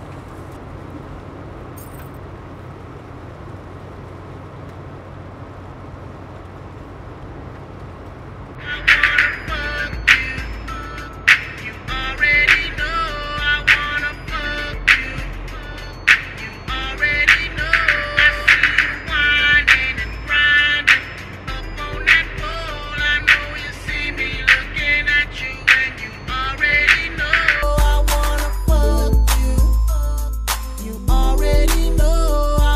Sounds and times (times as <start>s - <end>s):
Happy music: 8.6s - 32.7s
Tender music: 8.6s - 32.7s.